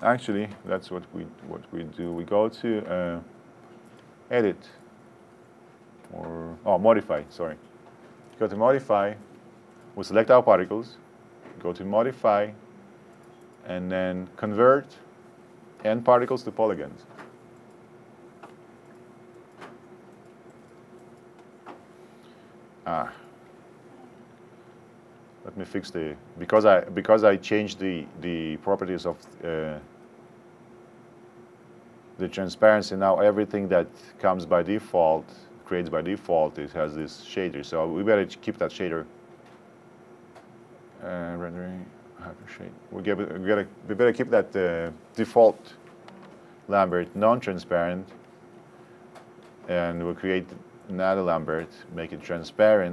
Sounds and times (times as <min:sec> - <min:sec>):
Speech: 0:00.0 - 0:03.3, 0:04.3 - 0:04.8, 0:06.1 - 0:07.6, 0:08.4 - 0:09.3, 0:10.0 - 0:11.0, 0:11.6 - 0:12.6, 0:13.6 - 0:15.1, 0:15.8 - 0:17.1, 0:22.8 - 0:23.3, 0:25.4 - 0:29.9, 0:32.2 - 0:39.1, 0:41.0 - 0:45.8, 0:46.7 - 0:48.2, 0:49.7 - 0:52.9.